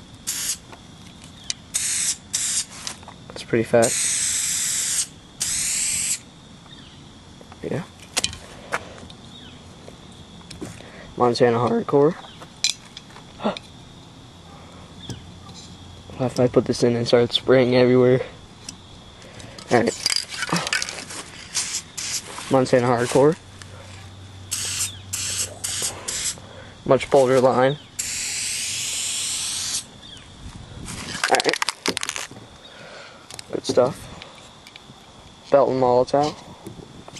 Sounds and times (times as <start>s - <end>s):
Spray: 0.2s - 0.6s, 1.7s - 3.0s, 3.8s - 6.3s, 21.5s - 22.5s, 24.5s - 26.4s, 28.0s - 29.9s
Speech: 7.6s - 7.9s, 11.2s - 12.2s, 16.1s - 18.3s, 22.5s - 23.4s, 26.9s - 27.8s, 35.5s - 36.4s.